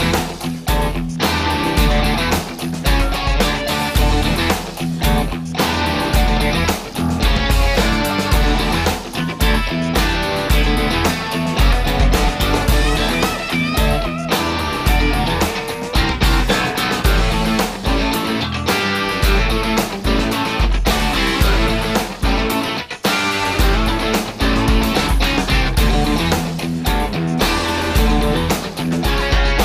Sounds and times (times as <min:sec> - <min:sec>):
Music: 0:00.0 - 0:29.6.